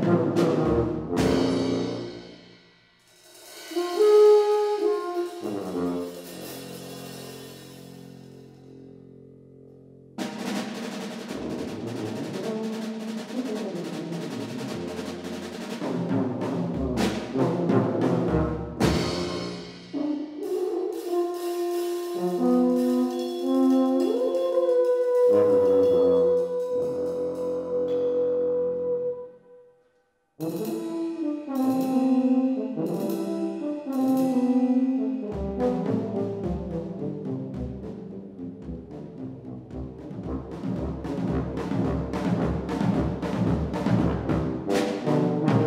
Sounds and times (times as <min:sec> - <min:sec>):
Bass drum: 0:00.0 - 0:02.1, 0:16.1 - 0:20.0, 0:38.6 - 0:44.7
Drum kit: 0:00.0 - 0:08.7, 0:10.2 - 0:28.0, 0:30.4 - 0:45.6.